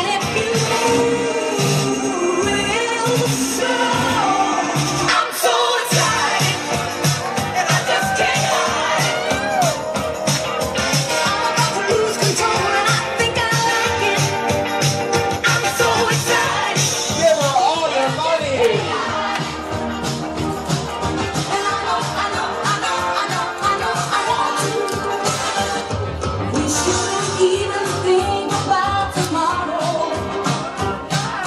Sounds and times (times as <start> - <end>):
Disco: 0.0 - 31.4.